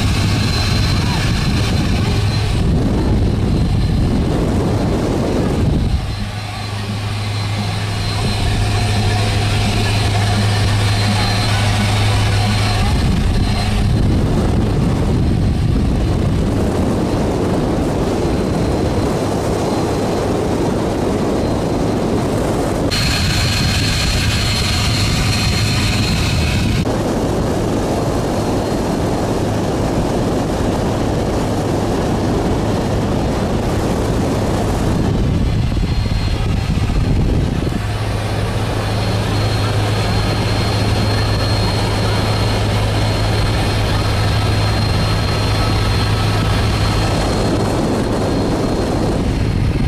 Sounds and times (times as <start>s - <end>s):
Motorboat, speedboat: 0.0s - 49.8s
Wind noise (microphone): 0.0s - 49.8s.